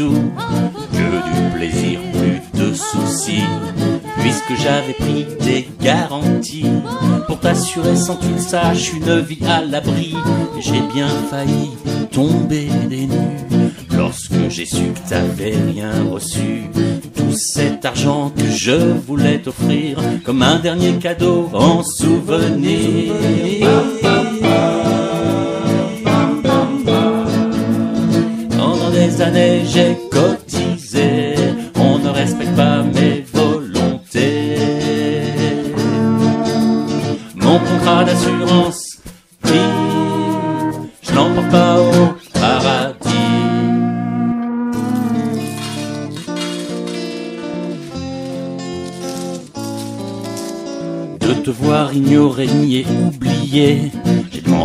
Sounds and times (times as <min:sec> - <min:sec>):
Blues: 0:00.0 - 0:54.6.